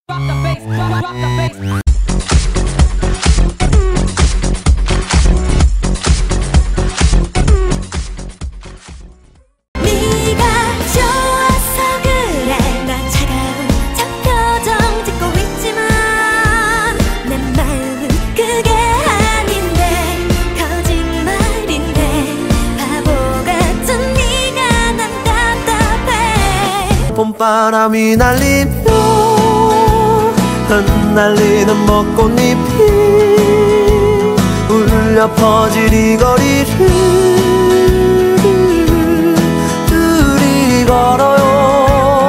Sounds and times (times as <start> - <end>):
Exciting music: 9.8 - 27.2, 28.0 - 41.2.